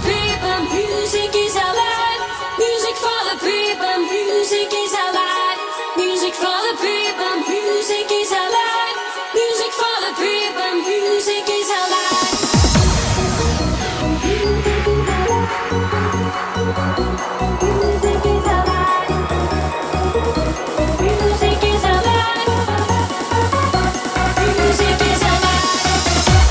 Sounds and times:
Trance music: 0:00.0 - 0:26.5.

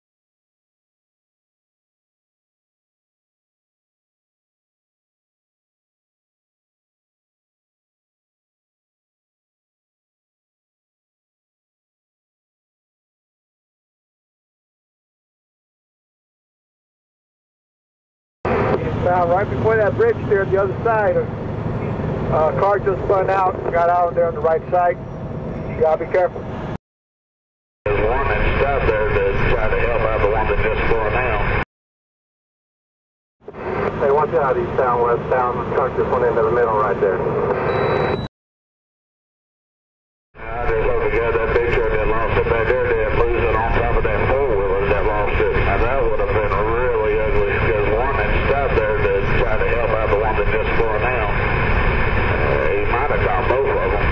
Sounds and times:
Speech: 0:18.5 - 0:21.3, 0:22.3 - 0:25.0, 0:25.7 - 0:26.5, 0:27.9 - 0:31.6, 0:33.8 - 0:37.5, 0:40.4 - 0:51.4, 0:52.3 - 0:54.1
Motor vehicle (road): 0:18.5 - 0:26.8, 0:33.4 - 0:38.3, 0:40.4 - 0:54.1.

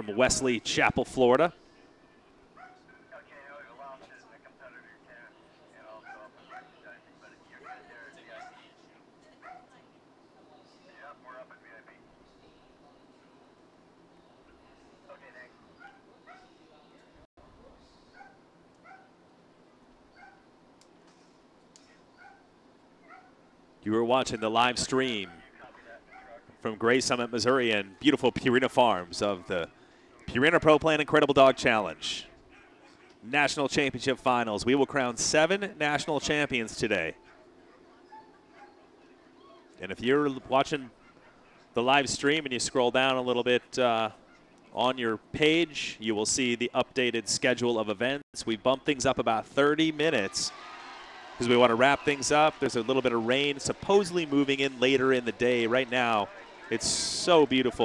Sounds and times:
Speech: 0:00.0 - 0:01.6, 0:23.8 - 0:29.7, 0:30.3 - 0:32.4, 0:33.2 - 0:37.2, 0:39.8 - 0:40.9, 0:41.8 - 0:44.2, 0:44.8 - 0:50.6, 0:51.4 - 0:57.8
Yip: 0:18.2 - 0:19.1, 0:23.0 - 0:23.3, 0:37.2 - 0:38.9.

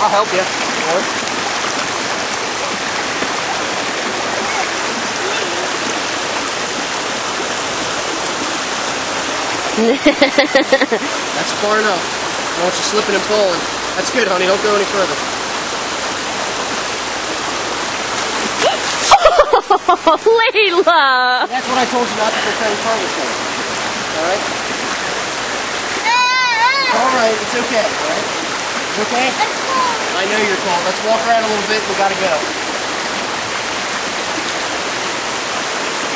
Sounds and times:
Waterfall: 0:00.0 - 0:36.1.

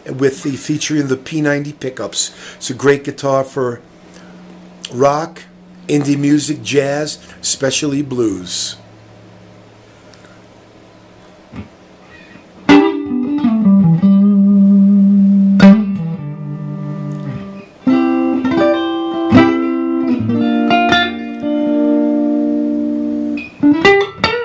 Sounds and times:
Electric guitar: 0:11.5 - 0:24.4.

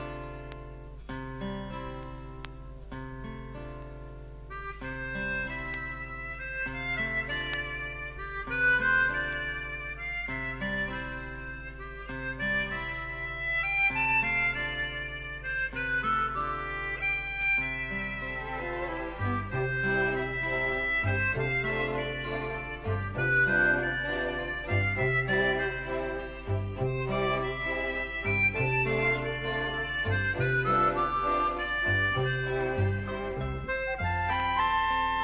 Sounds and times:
Harmonica: 0:04.5 - 0:35.2.

